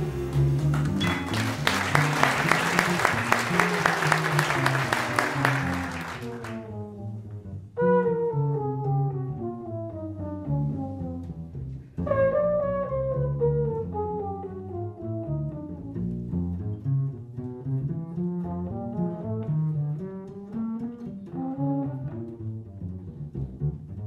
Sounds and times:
Saxophone: 0:00.0 - 0:11.3, 0:12.0 - 0:15.9
Brass instrument: 0:00.0 - 0:11.4, 0:12.0 - 0:15.9, 0:18.4 - 0:22.5
Double bass: 0:00.0 - 0:24.0.

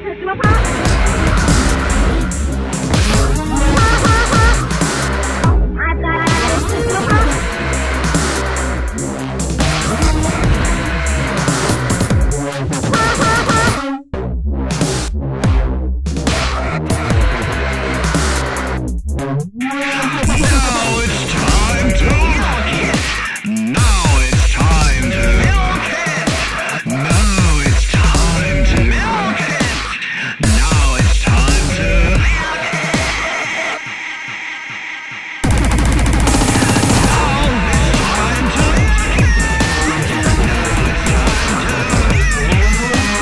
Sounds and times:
Music: 0:00.0 - 0:43.2.

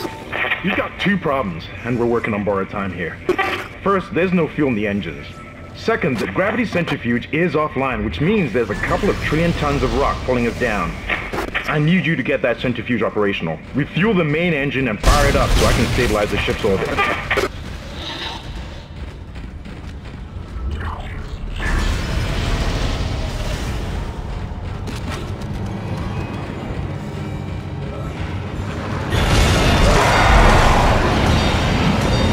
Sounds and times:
Speech: 0:03.8 - 0:11.0, 0:11.6 - 0:17.2.

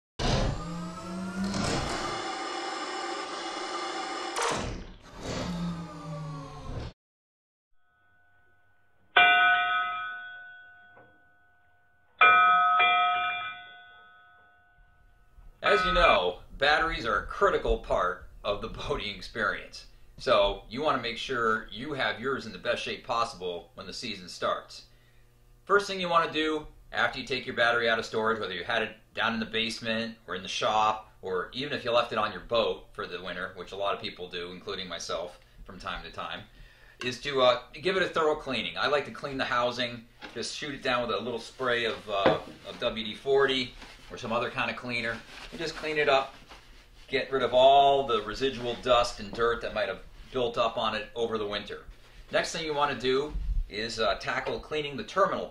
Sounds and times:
Speech: 0:15.6 - 0:24.9, 0:25.7 - 0:46.4, 0:47.1 - 0:55.5.

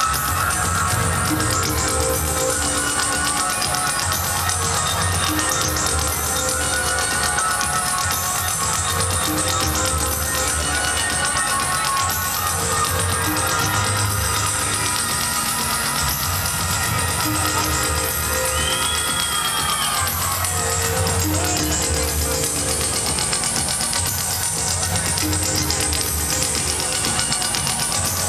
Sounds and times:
Music: 0:00.0 - 0:28.2.

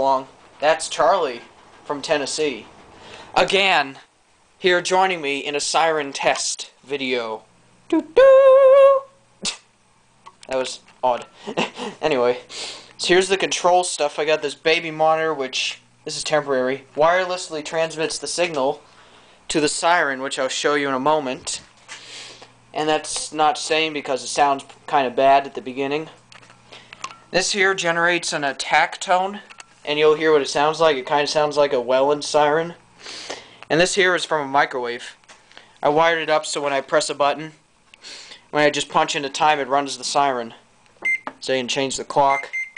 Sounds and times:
Speech: 0:00.0 - 0:02.7, 0:03.4 - 0:09.7, 0:10.4 - 0:11.3, 0:12.0 - 0:18.8, 0:19.5 - 0:21.7, 0:22.7 - 0:26.2, 0:27.3 - 0:32.8, 0:33.7 - 0:35.2, 0:35.8 - 0:37.6, 0:38.5 - 0:40.6, 0:41.4 - 0:42.5.

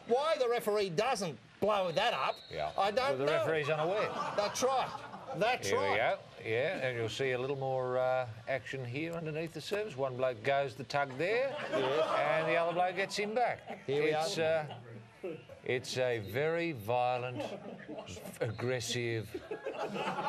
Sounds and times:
Speech: 0:00.1 - 0:15.0.

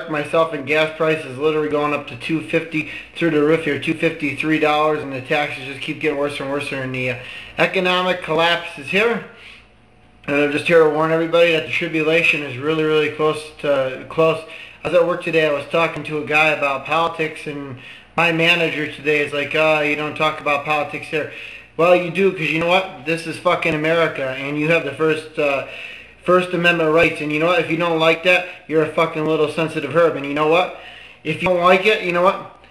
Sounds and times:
Male speech, man speaking: 0:00.0 - 0:09.3, 0:10.3 - 0:32.5
Narration, monologue: 0:00.0 - 0:32.7.

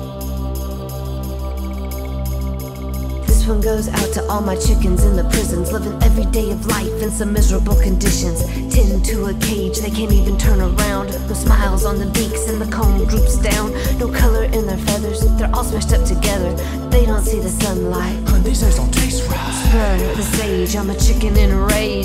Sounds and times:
Music: 0:00.0 - 0:22.0.

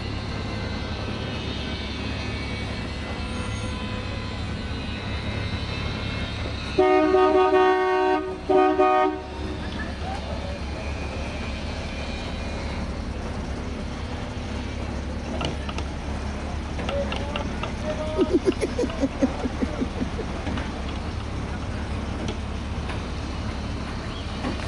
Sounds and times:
Bus: 0:00.0 - 0:24.6.

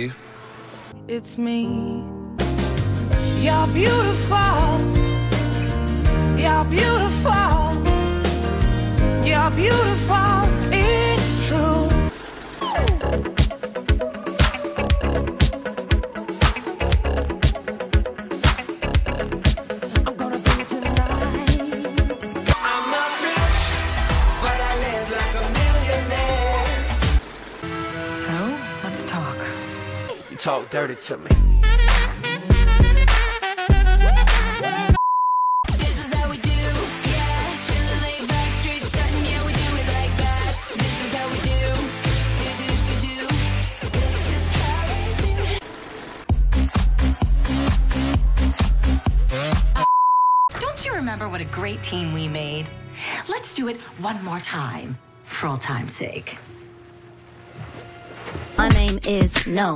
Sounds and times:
Music: 0:00.0 - 0:35.0, 0:35.6 - 0:49.9, 0:50.5 - 0:59.7.

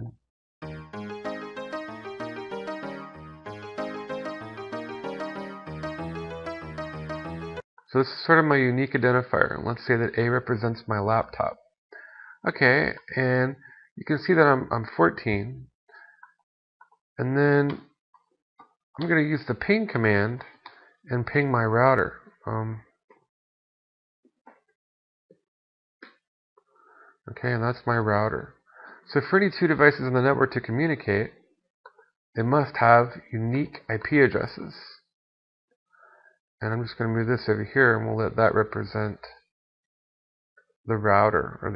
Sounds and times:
Music: 0:00.6 - 0:07.6
Speech: 0:07.9 - 0:11.6, 0:12.4 - 0:15.7, 0:17.2 - 0:17.8, 0:19.0 - 0:22.8, 0:27.3 - 0:31.4, 0:32.4 - 0:35.0, 0:36.6 - 0:39.4, 0:40.9 - 0:41.7.

